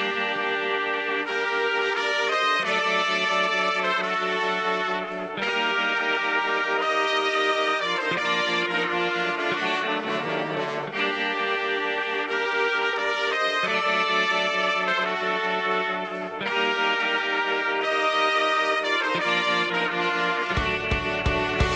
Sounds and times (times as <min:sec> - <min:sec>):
Trombone: 0:00.0 - 0:21.7.